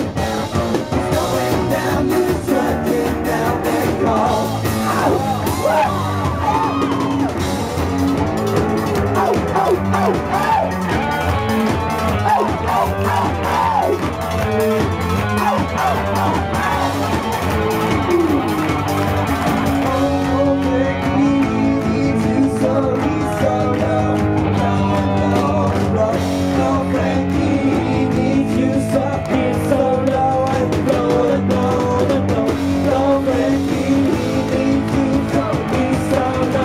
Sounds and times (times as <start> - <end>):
Singing: 0.0 - 7.2, 14.7 - 17.0, 19.5 - 36.6
Guitar: 0.0 - 36.6
Rock music: 0.0 - 36.6.